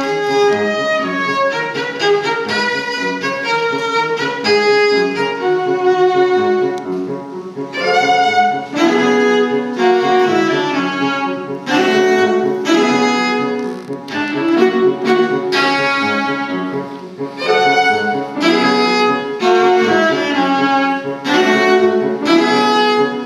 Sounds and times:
Cello: 0.0 - 23.2
Piano: 0.0 - 23.2
Violin, fiddle: 0.0 - 23.2.

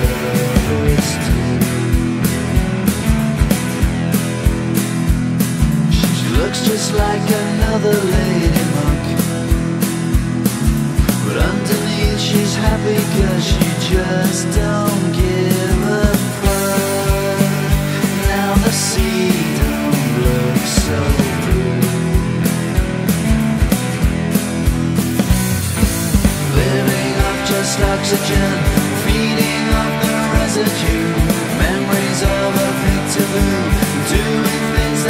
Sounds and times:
Music: 0.0 - 35.0.

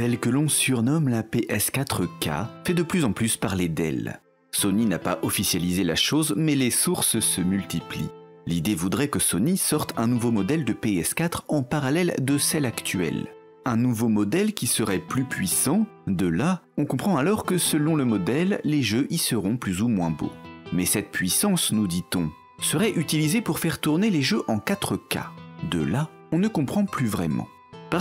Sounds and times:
Music: 0.0 - 28.0
Speech: 0.0 - 28.0.

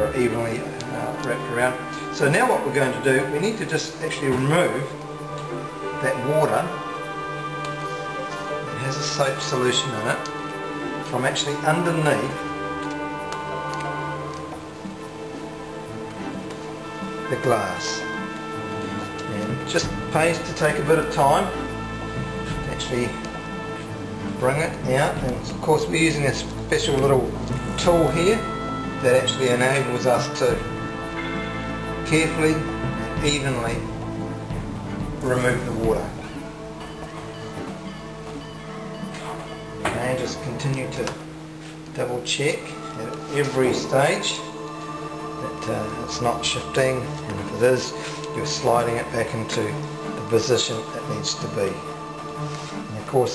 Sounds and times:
Speech: 0.0 - 5.0, 6.0 - 6.8, 8.7 - 10.3, 11.1 - 12.4, 17.3 - 18.1, 19.3 - 21.6, 22.5 - 23.2, 24.4 - 30.7, 32.0 - 33.9, 35.2 - 36.4, 39.9 - 41.2, 42.0 - 44.5, 45.4 - 51.9, 52.9 - 53.3
Music: 0.0 - 53.3.

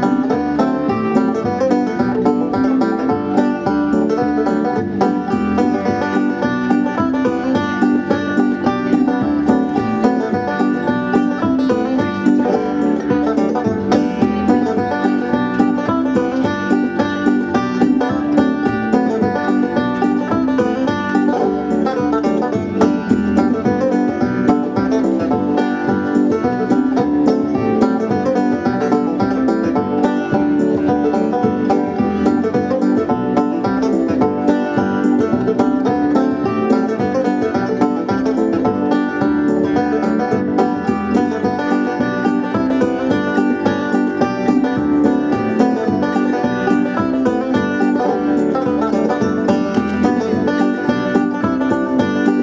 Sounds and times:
Music: 0.0 - 52.4.

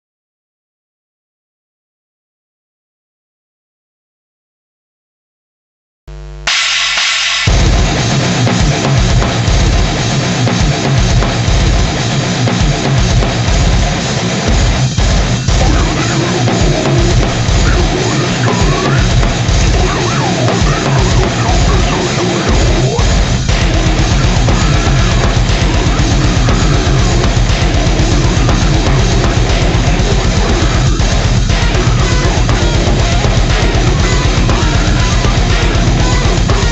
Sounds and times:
Heavy metal: 6.1 - 36.7.

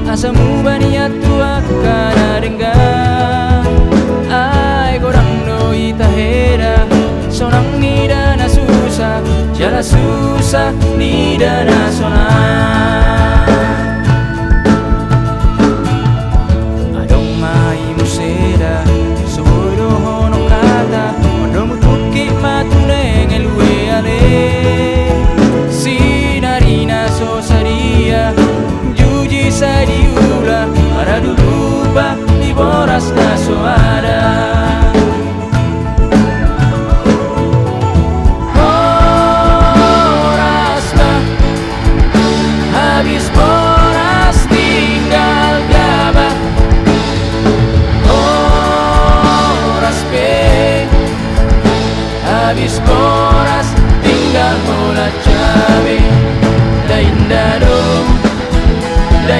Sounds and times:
Drum: 0.0 - 59.3.

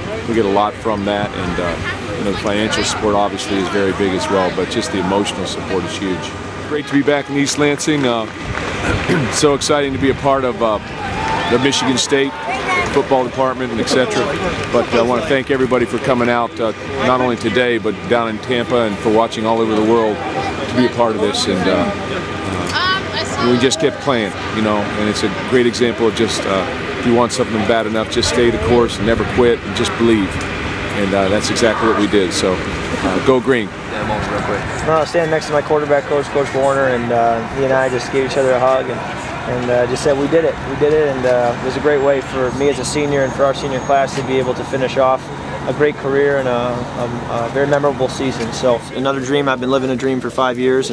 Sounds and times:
Speech: 0.0 - 8.3, 8.9 - 10.8, 11.5 - 50.9
Outside, urban or manmade: 0.0 - 50.9.

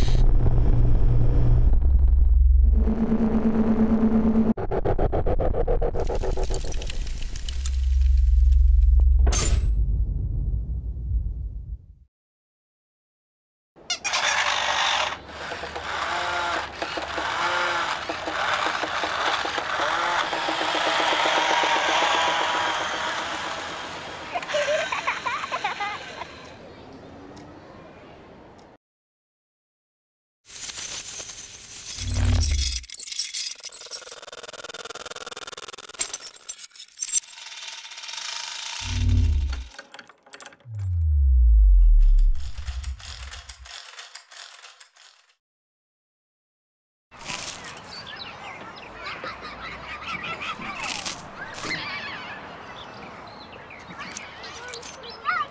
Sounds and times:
Ratchet, pawl: 14.1 - 24.1, 31.9 - 40.7, 42.4 - 45.3
Gears: 14.1 - 24.2, 31.8 - 40.7, 42.2 - 45.4.

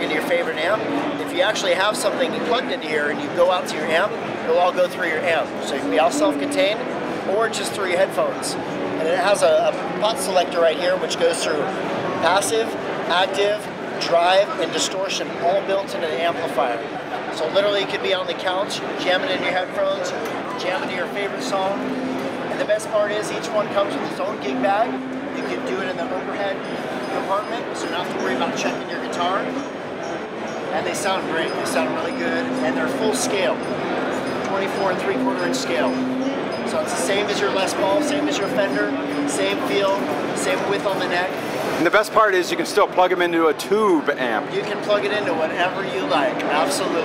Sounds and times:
Speech: 0.0 - 21.9, 22.5 - 29.6, 30.7 - 36.0, 36.7 - 47.0.

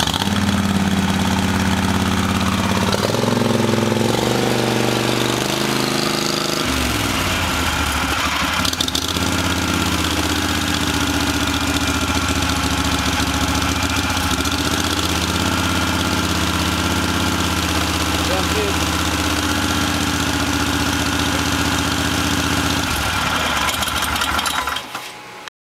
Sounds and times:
Idling: 0.0 - 5.5, 6.7 - 24.8
Vibration: 0.0 - 24.9
Vehicle: 0.0 - 25.3
Speech: 18.2 - 19.0.

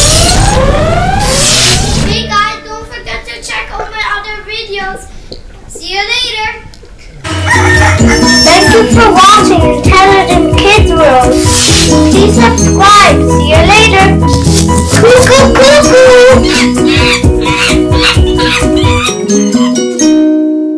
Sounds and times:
Music: 0.0 - 4.0, 7.3 - 20.7
Child speech, kid speaking: 2.1 - 5.1, 5.7 - 6.7, 8.5 - 11.3, 12.1 - 14.2, 15.0 - 16.4.

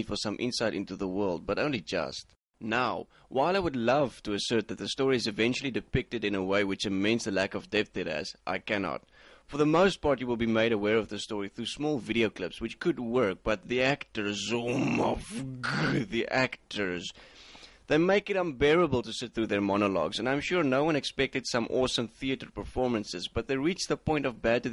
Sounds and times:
Speech: 0.0 - 17.2, 17.9 - 24.7
Inside, small room: 0.0 - 24.7.

